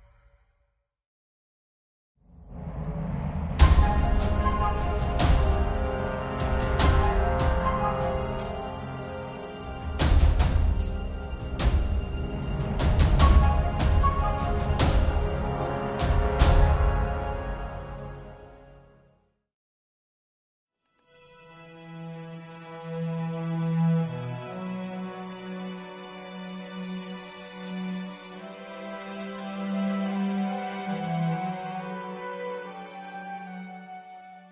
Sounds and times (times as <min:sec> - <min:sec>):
Scary music: 0:02.2 - 0:19.2, 0:21.6 - 0:34.5.